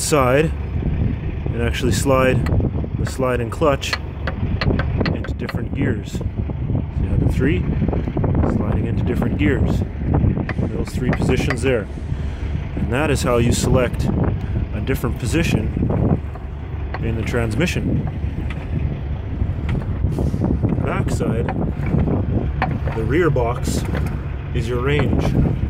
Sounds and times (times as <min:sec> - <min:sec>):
Speech: 0:00.0 - 0:00.6, 0:01.5 - 0:04.0, 0:05.1 - 0:06.3, 0:07.0 - 0:07.7, 0:08.4 - 0:09.9, 0:10.6 - 0:11.9, 0:12.8 - 0:14.1, 0:14.7 - 0:15.7, 0:17.0 - 0:17.9, 0:20.8 - 0:21.6, 0:22.9 - 0:25.4.